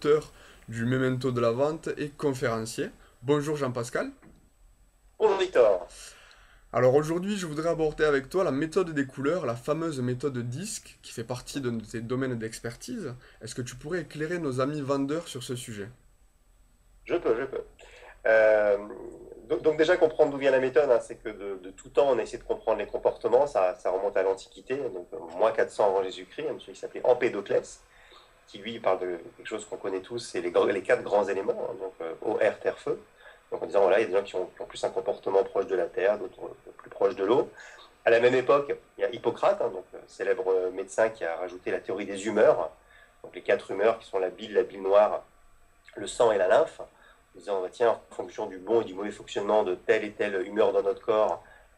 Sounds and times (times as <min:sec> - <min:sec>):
Speech: 0:00.0 - 0:04.3, 0:05.2 - 0:06.1, 0:06.7 - 0:16.0, 0:17.1 - 0:27.8, 0:28.5 - 0:45.2, 0:45.9 - 0:51.5.